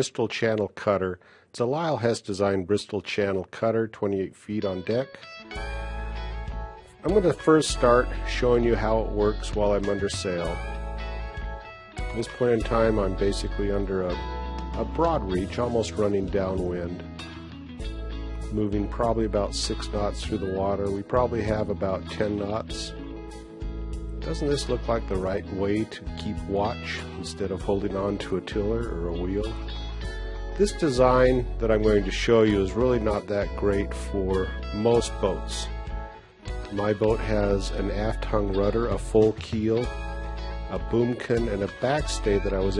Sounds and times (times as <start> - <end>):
Speech: 0.0 - 5.2, 7.0 - 10.6, 12.1 - 14.2, 14.8 - 17.0, 18.5 - 22.9, 24.2 - 29.6, 30.6 - 35.7, 36.7 - 39.9, 40.7 - 42.7
Music: 1.7 - 42.7.